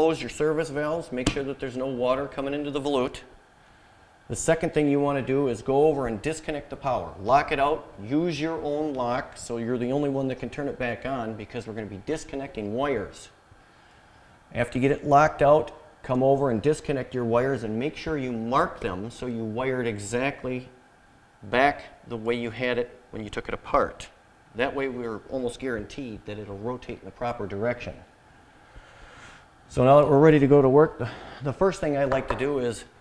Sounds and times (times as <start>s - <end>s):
Speech: 0.0s - 3.3s, 4.3s - 13.4s, 14.5s - 20.7s, 21.4s - 28.1s, 29.7s - 33.0s.